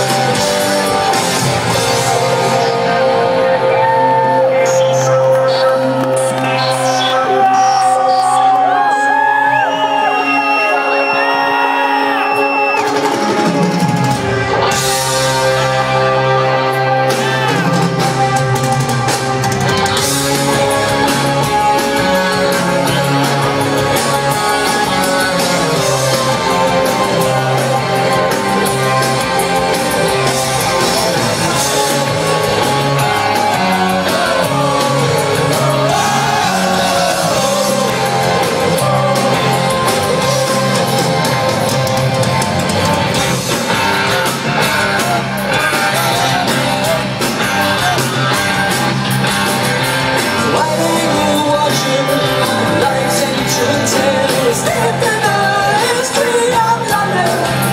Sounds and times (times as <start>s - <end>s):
Music: 0.0s - 57.7s.